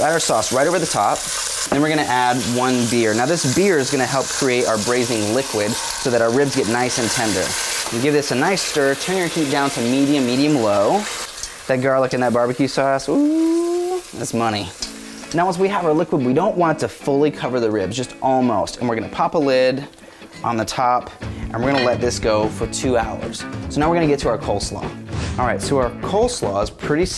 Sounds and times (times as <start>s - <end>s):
Speech: 0.0s - 1.2s, 1.8s - 11.1s, 11.7s - 27.1s
Music: 0.0s - 11.3s, 13.4s - 27.1s
Frying (food): 0.0s - 20.8s.